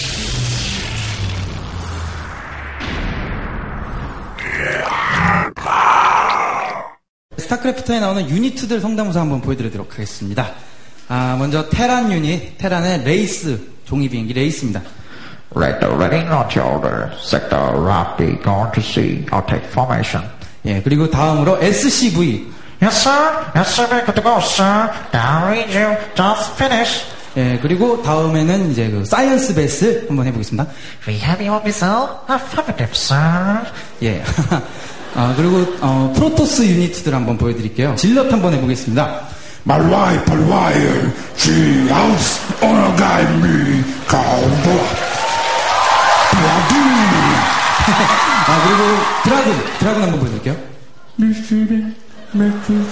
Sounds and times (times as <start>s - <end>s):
Speech: 7.4s - 14.9s, 15.5s - 34.6s, 35.2s - 45.0s, 46.3s - 47.5s, 48.4s - 52.9s.